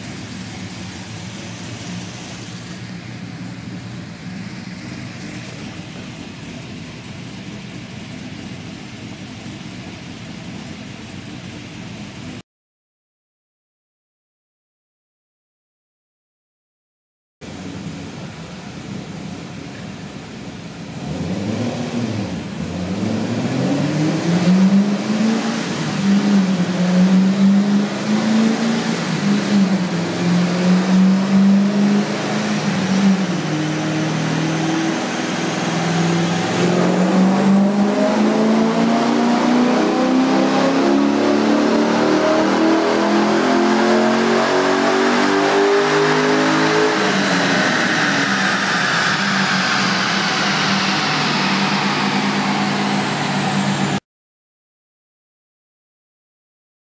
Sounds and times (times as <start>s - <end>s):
Car: 0.0s - 12.4s, 17.4s - 54.0s.